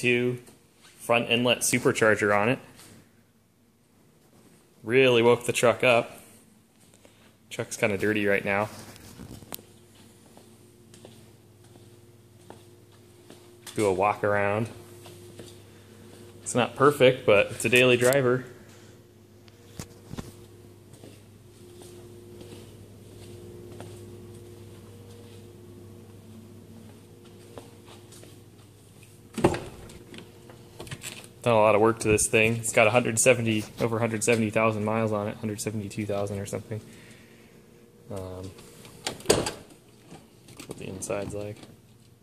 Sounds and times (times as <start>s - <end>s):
Speech: 0.0s - 2.7s, 4.8s - 6.2s, 7.5s - 8.8s, 13.7s - 14.8s, 16.5s - 18.6s, 31.4s - 36.9s, 38.1s - 38.6s, 40.7s - 41.7s.